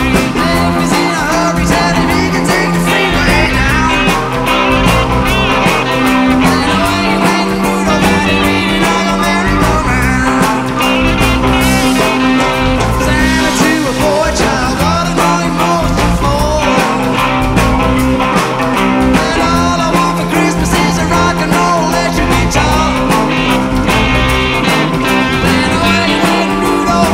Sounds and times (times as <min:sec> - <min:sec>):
Singing: 0:00.0 - 0:04.3, 0:06.1 - 0:10.8, 0:12.9 - 0:17.2, 0:19.1 - 0:23.6, 0:25.4 - 0:27.1
Guitar: 0:00.0 - 0:27.1
Psychedelic rock: 0:00.0 - 0:27.1
Rock and roll: 0:00.0 - 0:27.1.